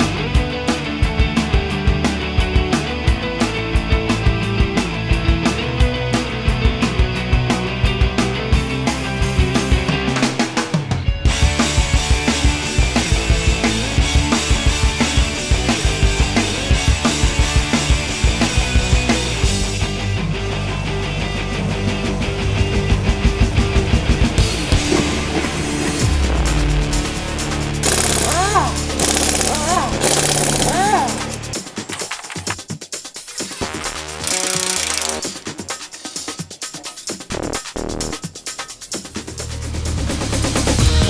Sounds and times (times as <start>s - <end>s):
Music: 0.0s - 41.0s.